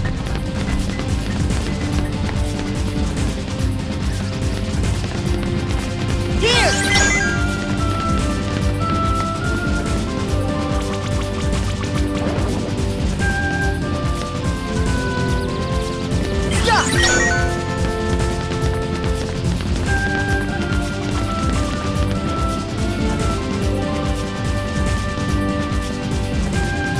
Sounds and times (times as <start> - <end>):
Music: 0.0 - 26.9
Speech: 6.4 - 7.0, 16.5 - 17.2.